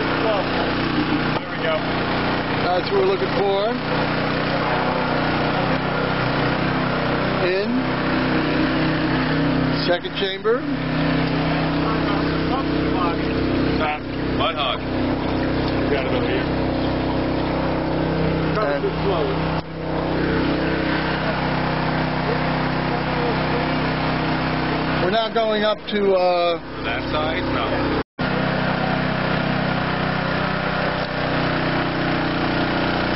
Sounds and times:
Vehicle: 0.0s - 33.1s
Speech: 2.6s - 3.8s, 7.4s - 7.8s, 9.8s - 10.6s, 18.5s - 19.4s, 25.0s - 27.9s.

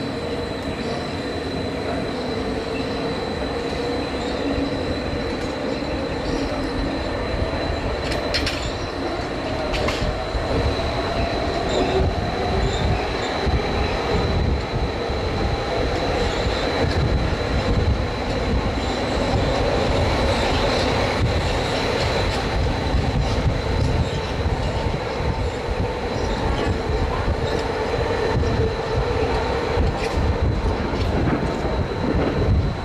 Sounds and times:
Outside, urban or manmade: 0.0s - 32.8s
Train: 0.0s - 32.8s
Train wheels squealing: 0.0s - 32.8s.

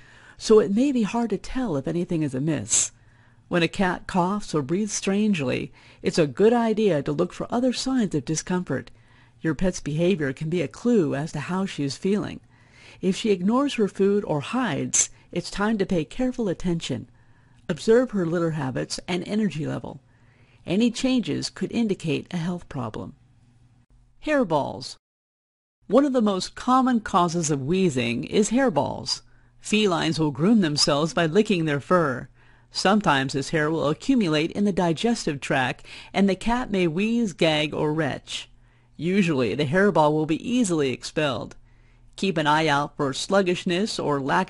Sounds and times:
Narration, monologue: 0.0s - 25.0s, 25.8s - 44.4s.

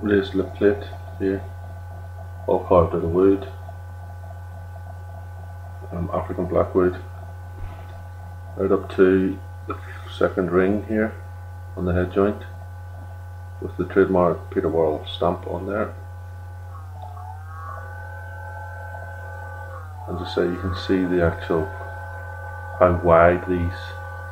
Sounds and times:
Speech: 0.0s - 1.5s, 2.5s - 3.6s, 5.9s - 7.1s, 8.6s - 11.2s, 11.8s - 12.6s, 13.6s - 16.0s, 20.1s - 21.8s, 22.8s - 24.0s.

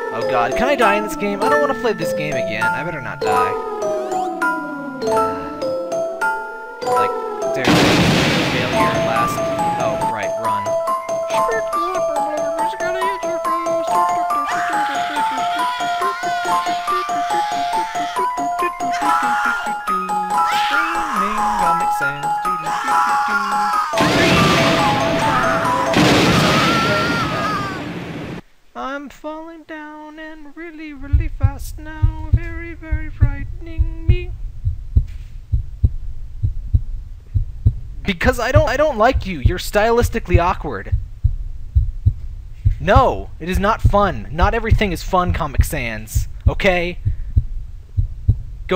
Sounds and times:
Music: 0.0s - 7.8s, 8.5s - 26.3s
Speech: 0.2s - 3.6s, 7.0s - 7.8s, 8.6s - 10.7s, 11.3s - 15.4s, 16.0s - 25.9s, 28.8s - 31.9s, 38.1s - 40.9s, 42.8s - 47.0s.

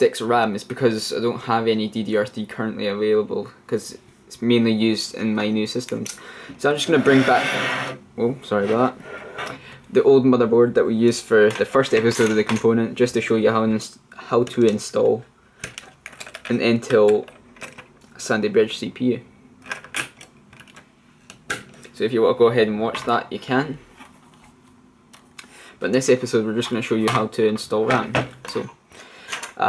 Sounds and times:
Speech: 0.0s - 9.0s, 9.9s - 15.3s, 16.5s - 17.3s, 18.2s - 19.3s, 21.9s - 23.8s, 25.8s - 28.8s
Inside, small room: 0.0s - 29.6s.

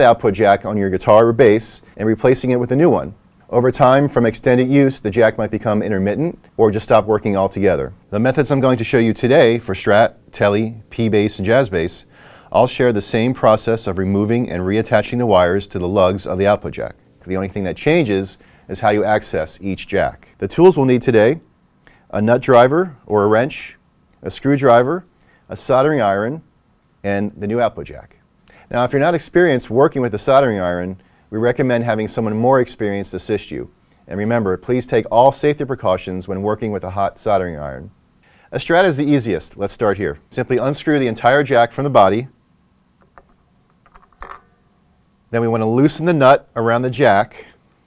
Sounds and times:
Speech: 0.0s - 21.5s, 22.1s - 42.4s, 45.3s - 47.6s.

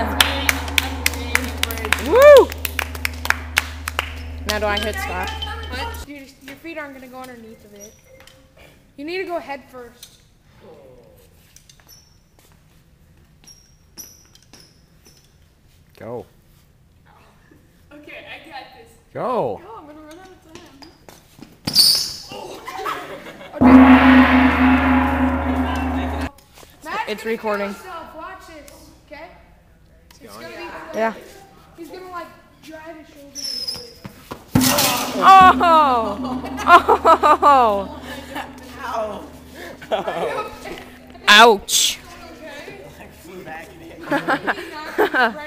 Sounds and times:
Gong: 0.0s - 6.1s, 23.6s - 26.3s, 34.6s - 41.4s.

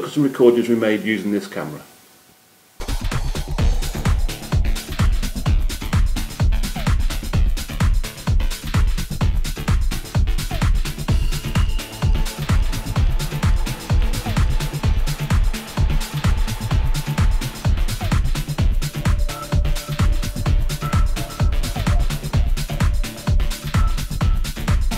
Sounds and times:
Music: 2.8s - 24.9s.

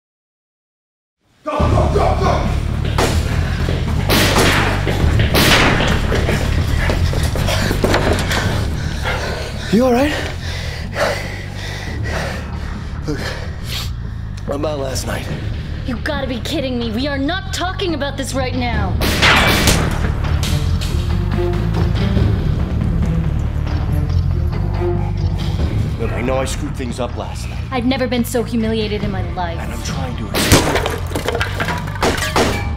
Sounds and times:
Music: 1.2s - 32.7s.

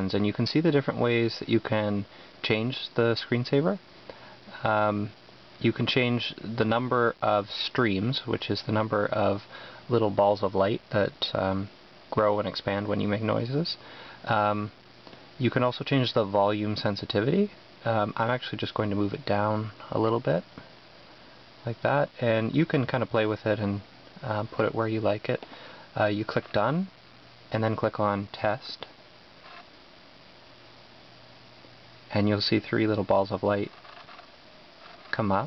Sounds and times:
Speech: 0.0s - 3.8s, 4.5s - 14.8s, 15.4s - 20.6s, 21.6s - 25.4s, 26.0s - 29.0s, 32.1s - 33.8s, 35.1s - 35.4s.

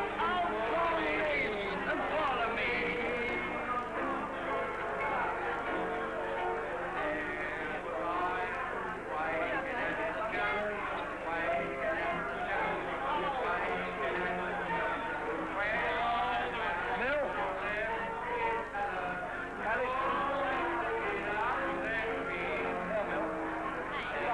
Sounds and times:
Music: 0.0s - 24.3s
Speech: 3.6s - 24.3s.

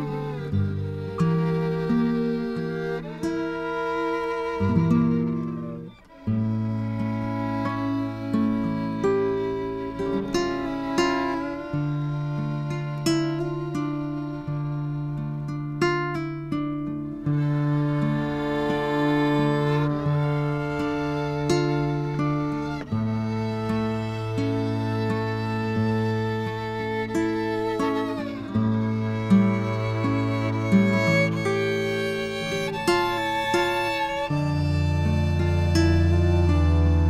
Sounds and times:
Violin, fiddle: 0.0s - 37.1s.

